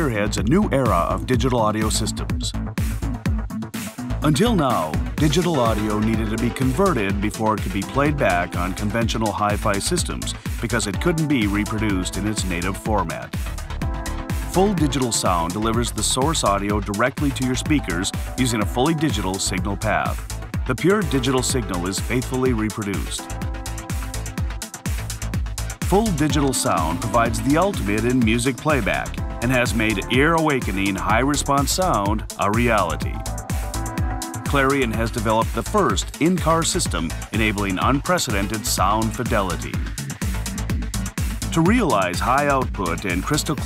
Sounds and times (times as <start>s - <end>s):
Speech: 0.0s - 2.6s, 4.2s - 13.4s, 14.5s - 23.2s, 25.9s - 33.2s, 34.5s - 39.8s, 41.5s - 43.6s
Music: 0.0s - 43.6s.